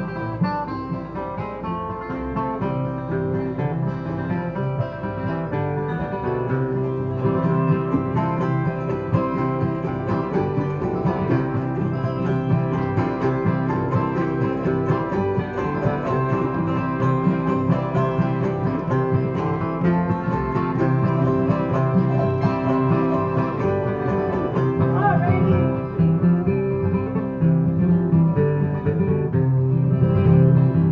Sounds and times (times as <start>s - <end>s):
Country: 0.0s - 30.9s.